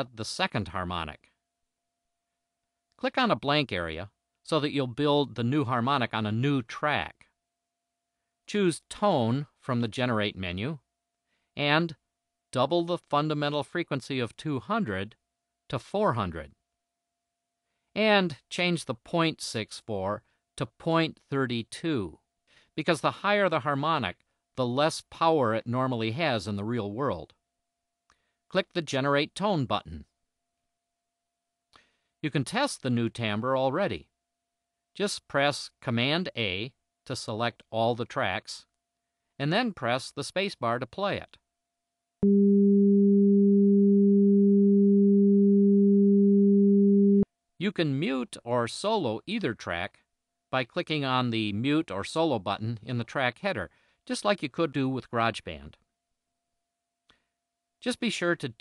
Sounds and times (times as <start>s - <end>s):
Sine wave: 42.2s - 47.2s.